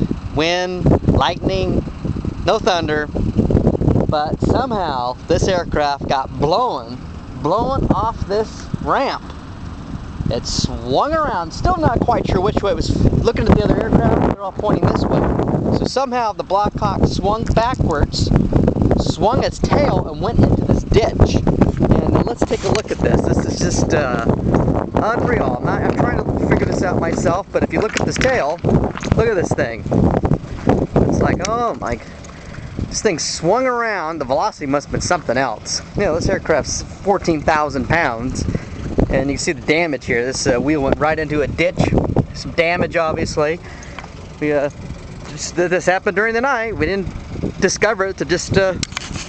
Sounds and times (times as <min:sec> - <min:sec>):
Wind noise (microphone): 0:00.0 - 0:49.2.